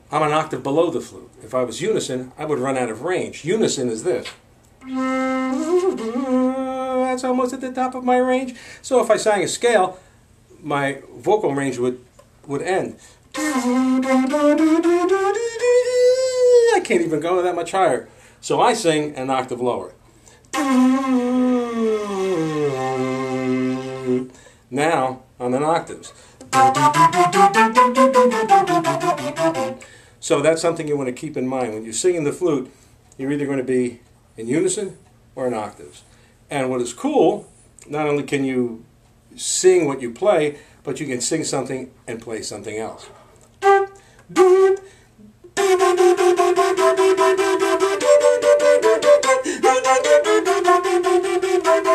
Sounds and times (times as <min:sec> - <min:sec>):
Flute: 0:04.8 - 0:07.1, 0:13.4 - 0:16.8, 0:20.6 - 0:24.3, 0:26.5 - 0:29.8, 0:43.6 - 0:44.9, 0:45.6 - 0:51.9.